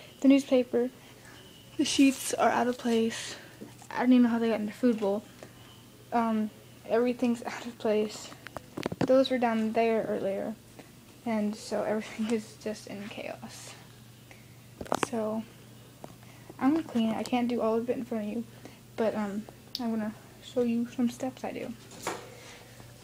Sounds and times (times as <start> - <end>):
Speech: 0.2 - 0.9, 1.8 - 5.2, 6.1 - 8.4, 9.0 - 10.6, 11.2 - 13.8, 15.0 - 15.5, 16.6 - 21.8.